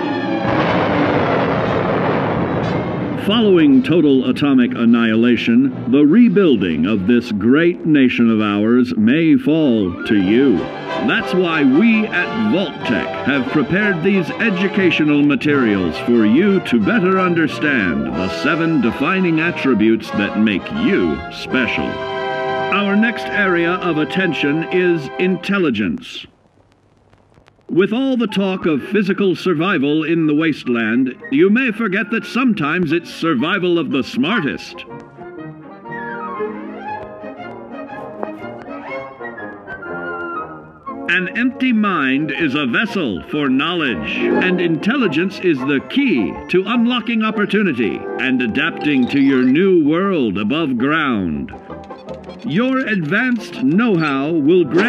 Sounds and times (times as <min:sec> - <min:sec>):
Music: 0:00.0 - 0:26.3, 0:27.7 - 0:54.8
Speech: 0:03.2 - 0:22.0, 0:22.7 - 0:26.3, 0:27.7 - 0:34.8, 0:41.1 - 0:51.6, 0:52.5 - 0:54.8.